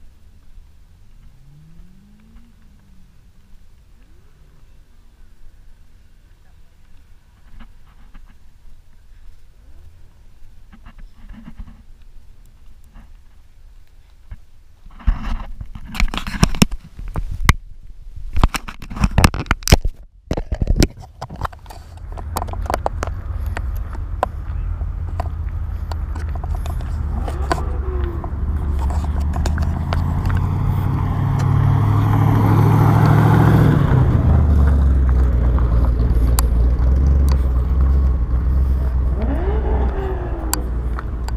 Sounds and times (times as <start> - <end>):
Car: 0.0 - 14.2, 19.0 - 41.3.